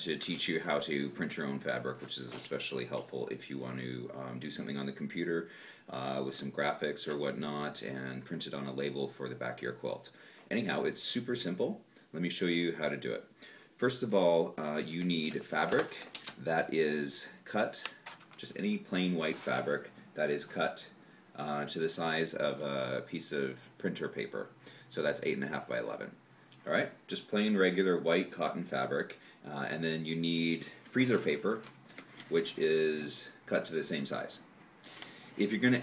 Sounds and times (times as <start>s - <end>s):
Speech: 0.0s - 31.7s, 32.3s - 34.5s, 35.4s - 35.8s.